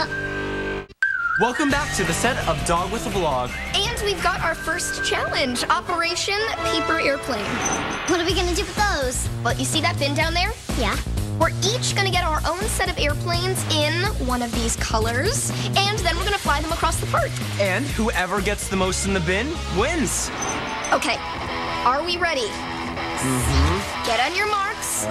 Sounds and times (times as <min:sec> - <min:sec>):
Music: 0:00.0 - 0:25.1.